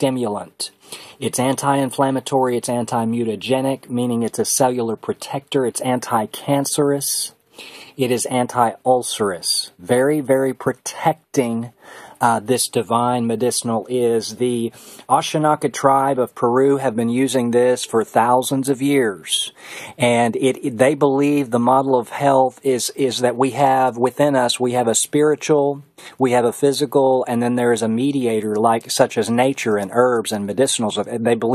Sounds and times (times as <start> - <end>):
Speech: 0.0 - 31.5.